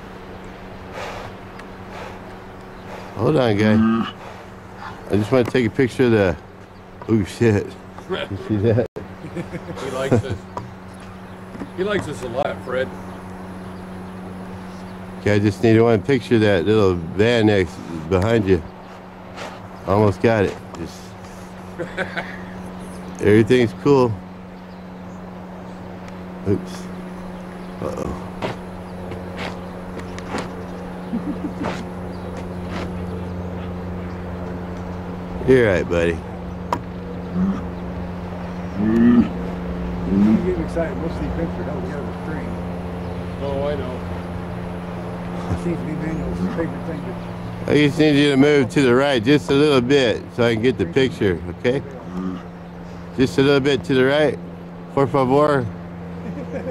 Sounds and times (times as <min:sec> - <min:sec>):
Speech: 0:15.2 - 0:18.7, 0:19.9 - 0:21.1, 0:45.5 - 0:52.4, 0:53.2 - 0:54.4, 0:55.0 - 0:55.7.